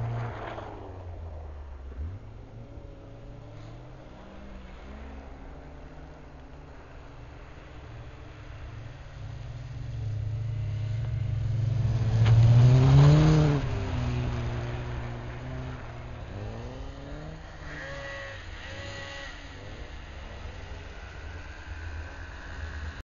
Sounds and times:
Car: 0:00.0 - 0:23.0.

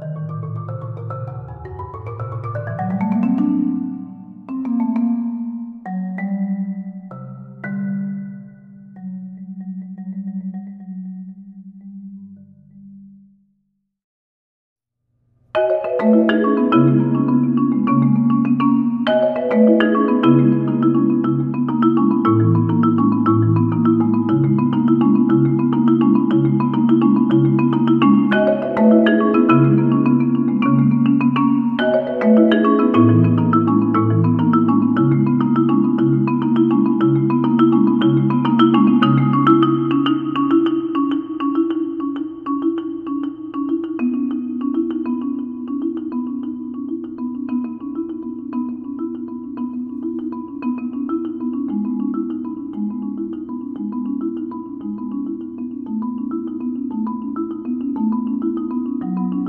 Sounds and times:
Marimba, xylophone: 0:00.0 - 0:13.4, 0:15.5 - 0:59.4.

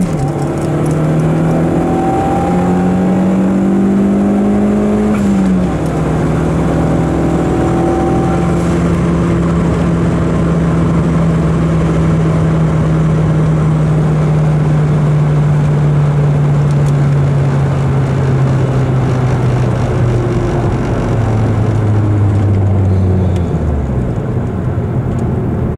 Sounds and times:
Engine: 0:00.0 - 0:25.7
Vehicle: 0:00.0 - 0:25.7.

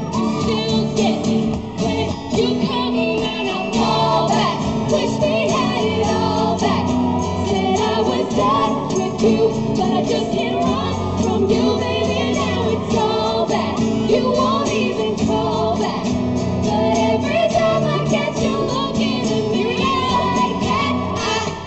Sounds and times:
Inside, large room or hall: 0:00.0 - 0:21.6
Music: 0:00.0 - 0:21.6
Singing: 0:00.0 - 0:21.6.

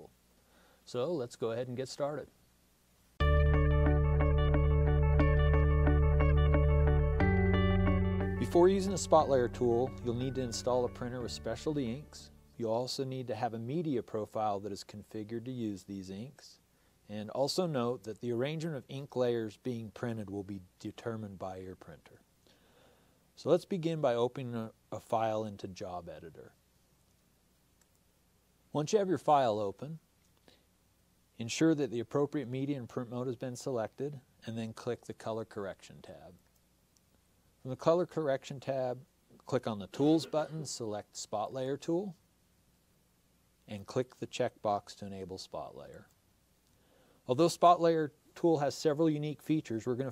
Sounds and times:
Speech: 0:00.9 - 0:02.4, 0:08.4 - 0:22.2, 0:23.4 - 0:26.6, 0:28.7 - 0:30.0, 0:31.4 - 0:36.4, 0:37.6 - 0:42.2, 0:43.7 - 0:46.1, 0:47.3 - 0:50.1.

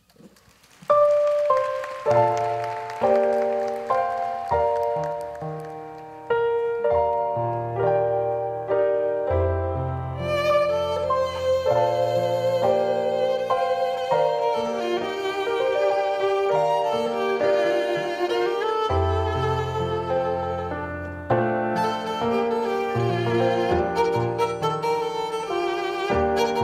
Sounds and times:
Violin, fiddle: 0:01.2 - 0:26.6.

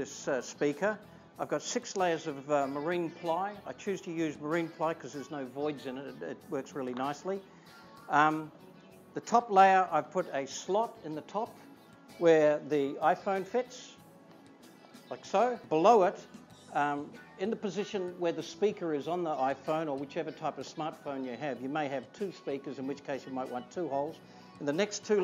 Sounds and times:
Speech: 0:00.0 - 0:07.4, 0:08.1 - 0:08.5, 0:09.2 - 0:11.5, 0:12.2 - 0:14.0, 0:15.1 - 0:25.2
Music: 0:00.0 - 0:25.2.

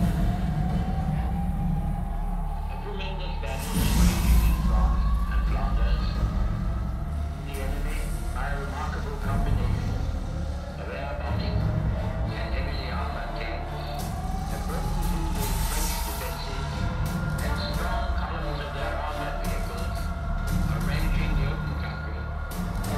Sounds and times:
Music: 0:00.0 - 0:22.9
Speech: 0:02.5 - 0:06.4, 0:07.4 - 0:10.0, 0:10.8 - 0:22.9.

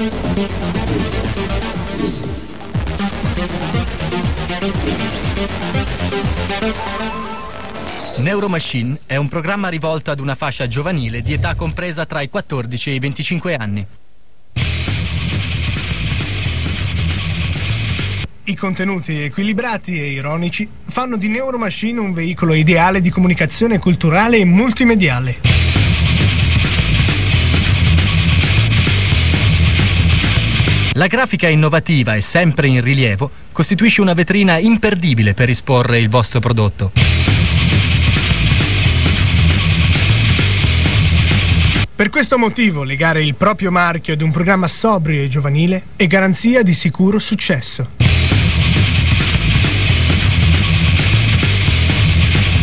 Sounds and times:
Music: 0:00.0 - 0:08.7, 0:14.6 - 0:18.3, 0:25.4 - 0:31.0, 0:37.0 - 0:41.9, 0:48.0 - 0:52.6
Speech: 0:08.2 - 0:14.0, 0:18.4 - 0:25.5, 0:31.0 - 0:37.0, 0:42.0 - 0:48.0.

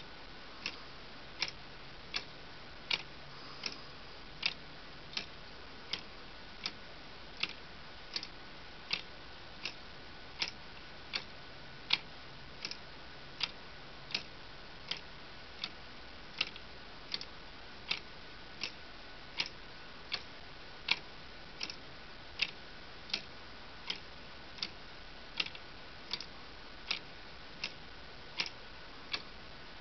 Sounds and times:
Tick-tock: 0:01.4 - 0:02.3, 0:07.4 - 0:09.8, 0:10.4 - 0:11.3, 0:11.9 - 0:12.8, 0:13.4 - 0:14.3, 0:16.4 - 0:17.3, 0:17.9 - 0:18.8, 0:19.4 - 0:20.3, 0:20.9 - 0:21.8, 0:22.4 - 0:23.3, 0:25.4 - 0:27.8, 0:28.4 - 0:29.3.

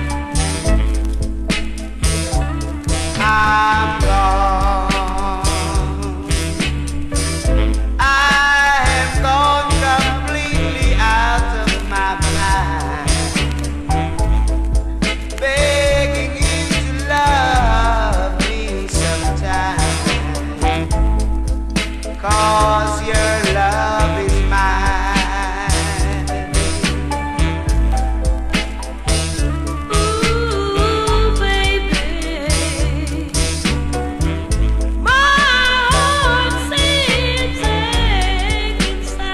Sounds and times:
Music: 0:00.0 - 0:39.3.

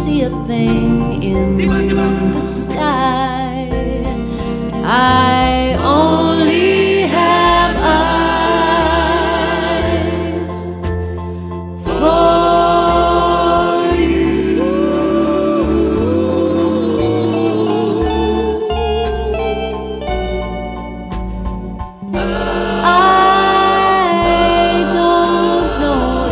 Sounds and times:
Steel guitar, slide guitar: 0:17.1 - 0:25.1.

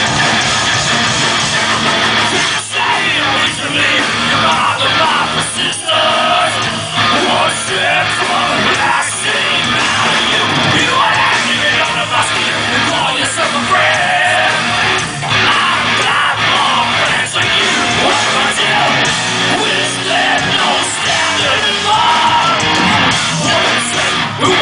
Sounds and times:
Music: 0:00.0 - 0:24.6.

